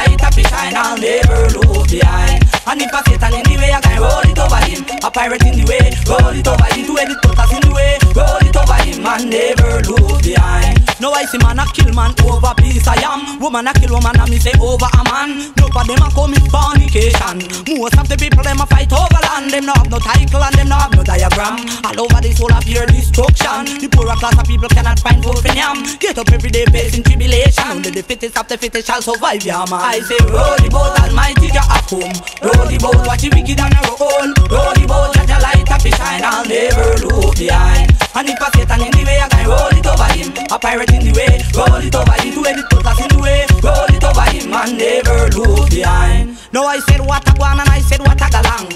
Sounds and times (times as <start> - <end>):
Music: 0.0 - 48.7.